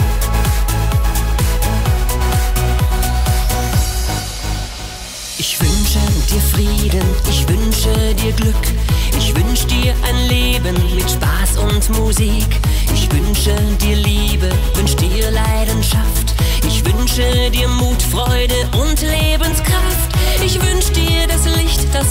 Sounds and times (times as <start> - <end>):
Music: 0.0 - 22.1.